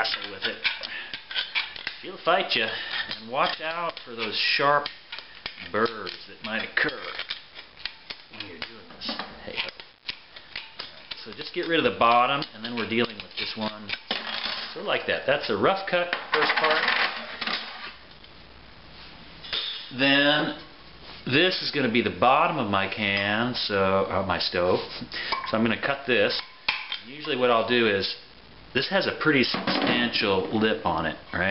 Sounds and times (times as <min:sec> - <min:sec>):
Speech: 0:00.0 - 0:00.7, 0:02.0 - 0:04.9, 0:05.6 - 0:07.2, 0:08.3 - 0:09.8, 0:11.2 - 0:14.0, 0:14.8 - 0:17.0, 0:19.9 - 0:26.4, 0:27.0 - 0:28.2, 0:28.8 - 0:31.5.